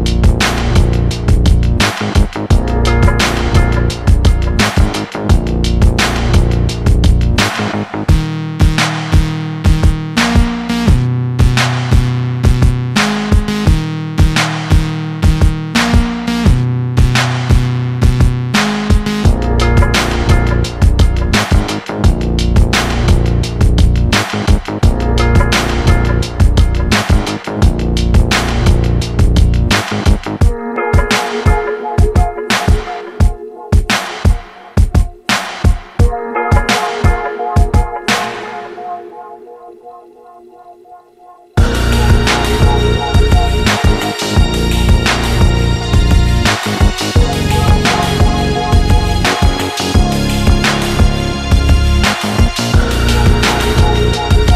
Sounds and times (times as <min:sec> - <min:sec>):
Drum machine: 0:00.0 - 0:39.9, 0:41.6 - 0:54.5
Electronica: 0:00.0 - 0:54.5.